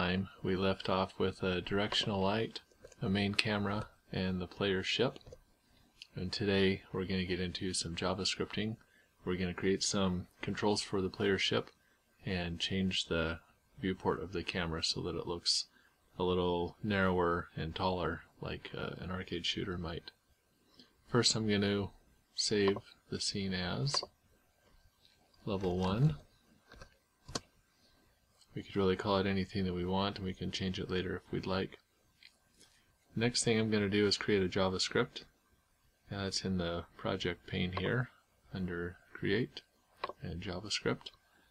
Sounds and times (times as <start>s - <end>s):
Speech: 0.0s - 5.3s, 6.0s - 20.2s, 21.1s - 24.1s, 25.4s - 26.3s, 28.5s - 31.8s, 33.2s - 35.4s, 36.1s - 41.2s.